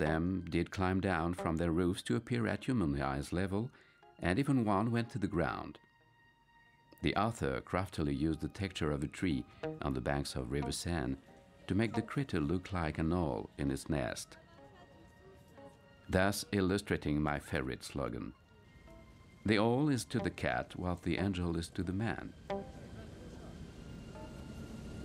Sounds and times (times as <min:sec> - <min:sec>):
Speech: 0:00.0 - 0:05.8, 0:07.0 - 0:15.1, 0:16.1 - 0:18.4, 0:19.5 - 0:23.7
Music: 0:00.0 - 0:25.0.